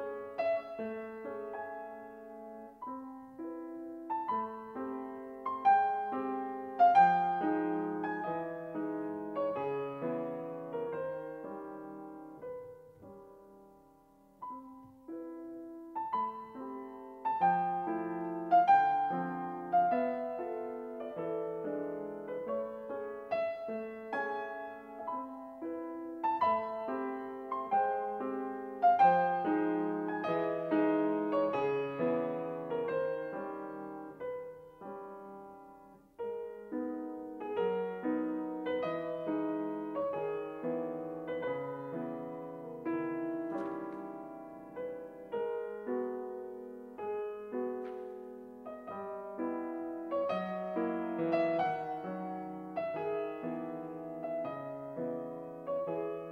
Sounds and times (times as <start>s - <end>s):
Music: 0.0s - 56.3s.